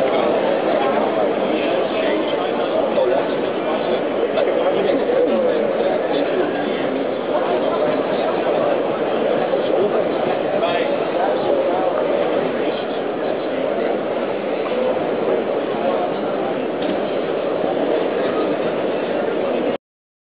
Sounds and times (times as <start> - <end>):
Speech: 0.0 - 19.8.